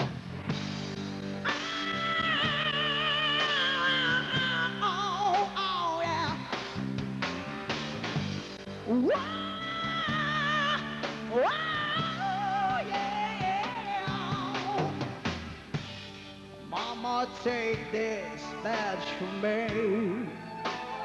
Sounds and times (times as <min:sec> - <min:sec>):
Music: 0:00.0 - 0:21.0.